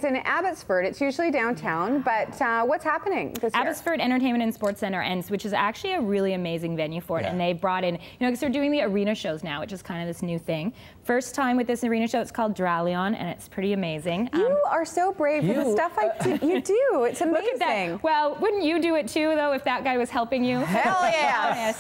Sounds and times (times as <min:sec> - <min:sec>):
Speech: 0:07.2 - 0:07.4.